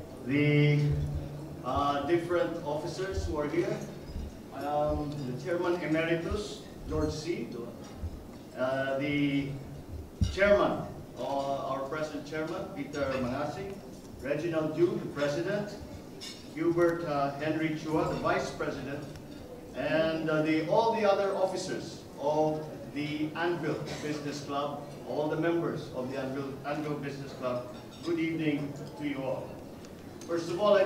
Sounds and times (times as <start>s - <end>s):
Narration, monologue: 0.0s - 30.8s
Male speech, man speaking: 0.2s - 3.9s, 4.5s - 7.8s, 8.6s - 9.6s, 10.2s - 15.8s, 16.6s - 19.2s, 19.8s - 29.5s, 30.2s - 30.8s.